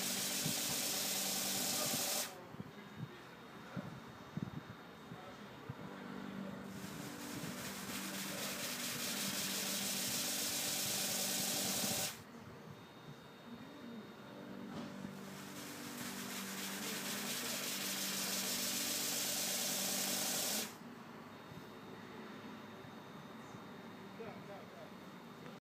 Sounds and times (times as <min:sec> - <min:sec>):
Speech: 0:01.7 - 0:04.0, 0:05.0 - 0:06.7, 0:23.4 - 0:25.0.